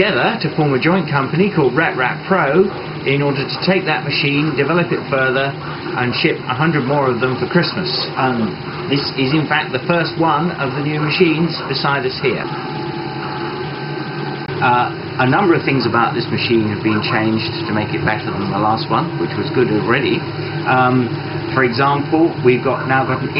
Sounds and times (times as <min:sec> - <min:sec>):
Speech: 0:00.0 - 0:12.6, 0:14.6 - 0:23.3
Printer: 0:00.0 - 0:23.3.